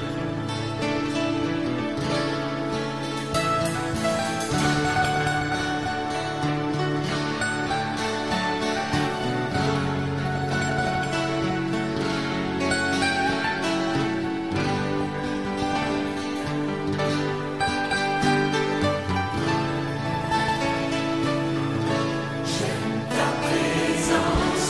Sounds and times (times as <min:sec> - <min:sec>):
Music: 0:00.0 - 0:24.7.